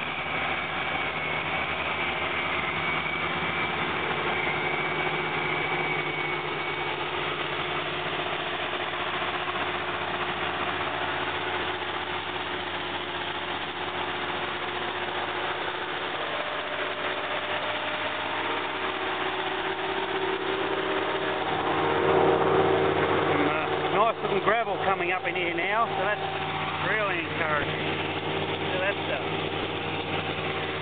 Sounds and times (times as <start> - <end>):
Engine: 0.0 - 30.8
Outside, rural or natural: 0.0 - 30.8
Vehicle: 0.0 - 30.8
Vibration: 0.0 - 30.8.